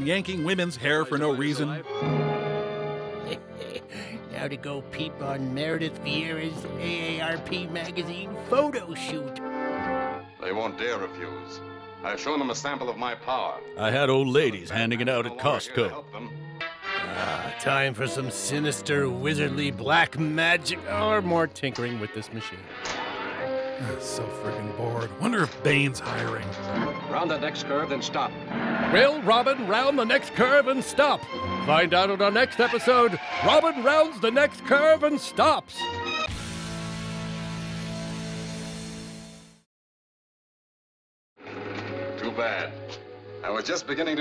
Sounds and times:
Speech: 0.0s - 1.8s, 3.9s - 9.4s, 10.4s - 16.3s, 17.0s - 22.6s, 23.8s - 26.6s, 28.9s - 35.8s
Music: 0.0s - 39.7s, 41.4s - 44.2s.

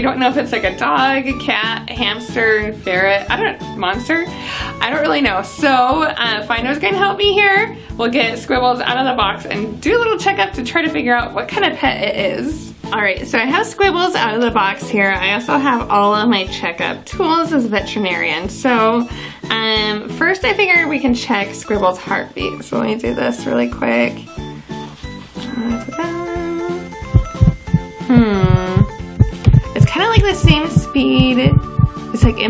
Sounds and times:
Speech: 0.0s - 24.2s, 29.8s - 31.6s, 32.2s - 32.5s
Music: 0.0s - 32.5s.

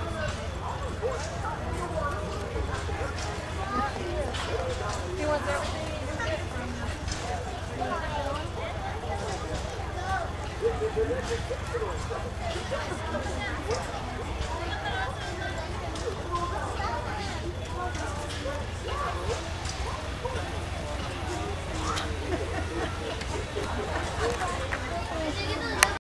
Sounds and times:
Speech: 0.0s - 26.0s.

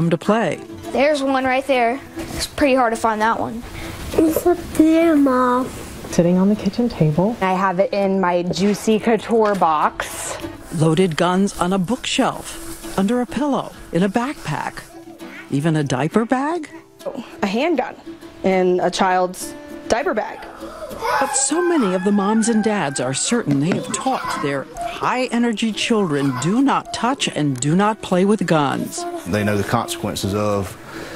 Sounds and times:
Music: 0.0s - 31.1s.

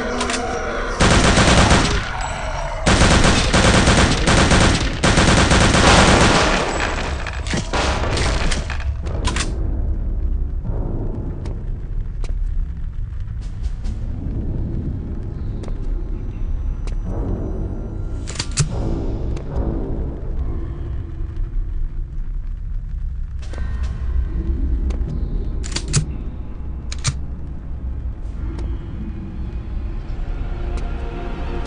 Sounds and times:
Music: 0.0s - 31.6s.

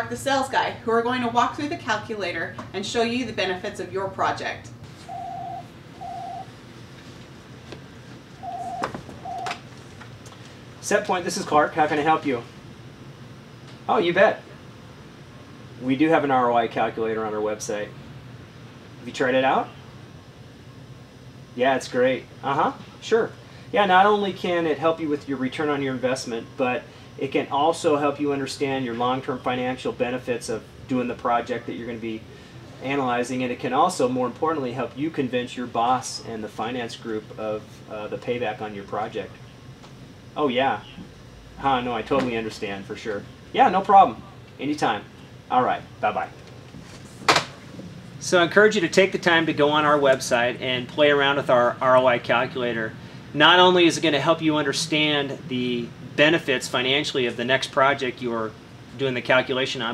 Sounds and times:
Speech: 10.8s - 12.5s, 13.9s - 14.5s, 15.8s - 18.0s, 19.0s - 19.7s, 21.6s - 39.4s, 40.4s - 46.4s, 48.2s - 59.9s.

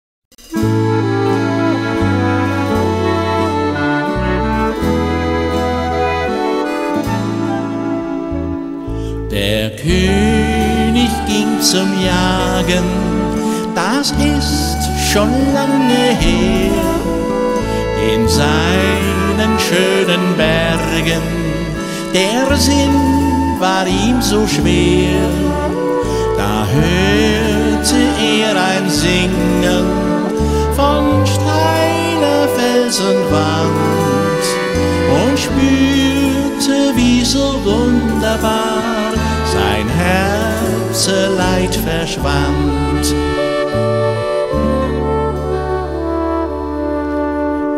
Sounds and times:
Tender music: 0.4s - 47.7s.

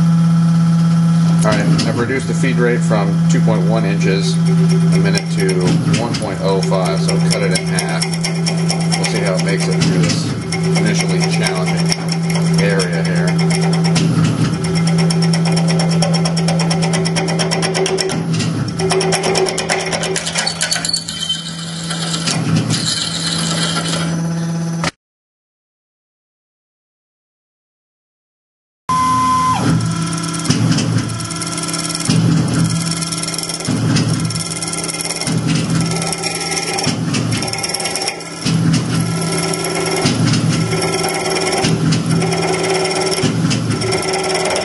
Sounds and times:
Drill: 6.4s - 24.2s, 29.6s - 44.6s.

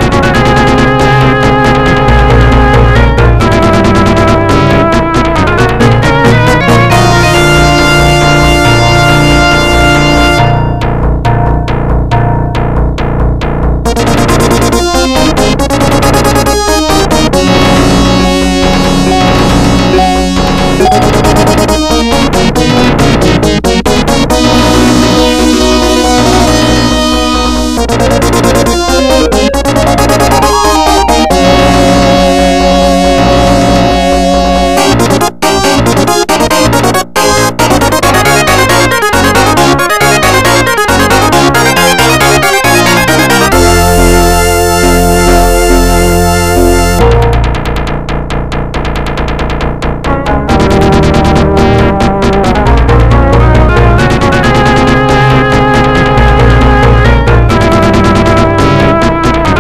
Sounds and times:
Music: 0.0s - 59.6s.

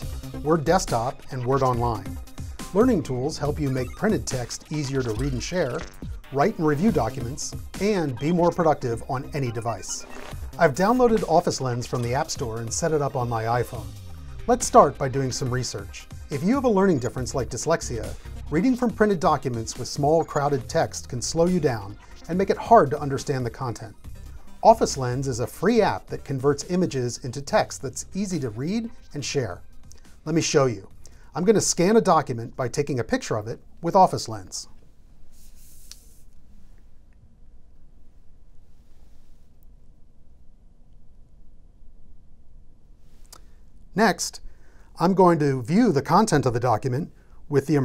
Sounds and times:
Speech: 0.0s - 13.9s, 14.5s - 24.0s, 24.6s - 29.6s, 30.2s - 34.8s, 44.0s - 44.4s, 45.0s - 47.8s
Music: 0.0s - 33.4s, 45.0s - 47.8s.

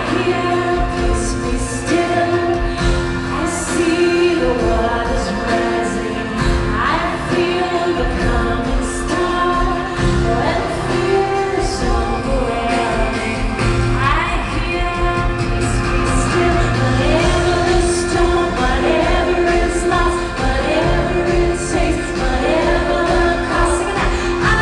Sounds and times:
Female singing: 0.0s - 24.6s
Music: 0.0s - 24.6s.

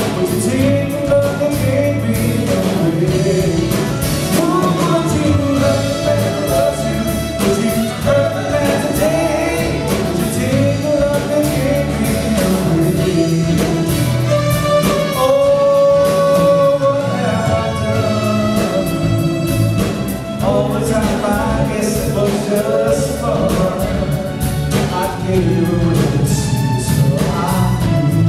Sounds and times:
Pop music: 0.0s - 28.2s.

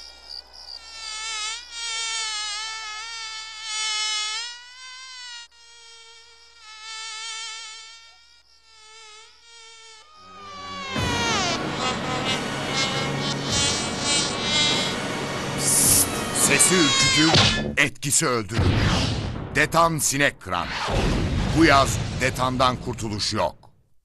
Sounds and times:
Cricket: 0.0s - 10.4s
Fly, housefly: 0.0s - 17.4s
Mosquito: 0.0s - 17.4s.

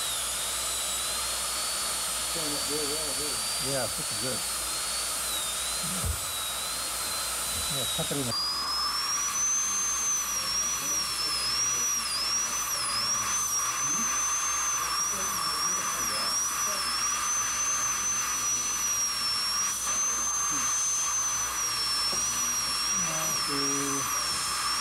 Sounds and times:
Electric toothbrush: 0.0s - 24.8s.

